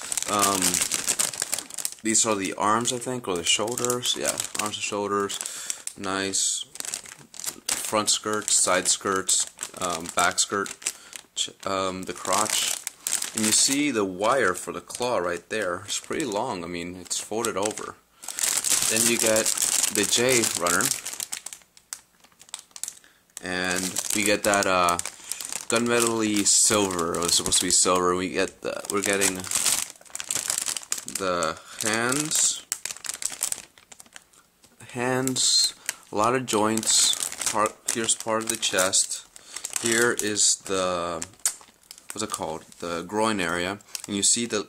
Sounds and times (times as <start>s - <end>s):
Inside, small room: 0.0s - 44.6s
Speech: 0.3s - 1.0s, 2.0s - 5.4s, 6.0s - 6.8s, 7.7s - 10.8s, 11.4s - 12.8s, 13.4s - 18.0s, 18.8s - 21.0s, 23.4s - 25.0s, 25.7s - 29.6s, 31.1s - 32.7s, 34.8s - 41.4s, 42.2s - 44.6s.